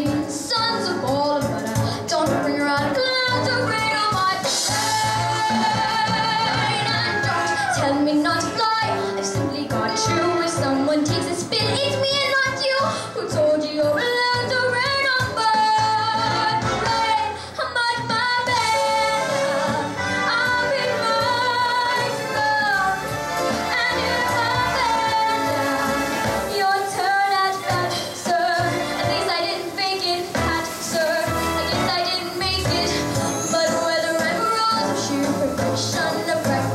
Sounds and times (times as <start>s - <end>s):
Female singing: 0.0s - 36.7s
Music: 0.0s - 36.7s.